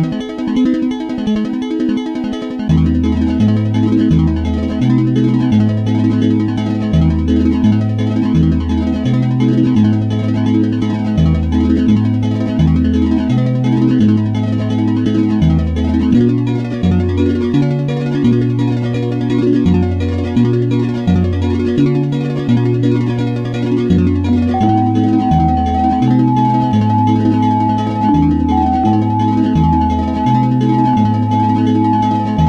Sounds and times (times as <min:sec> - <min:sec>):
Music: 0:00.0 - 0:32.4.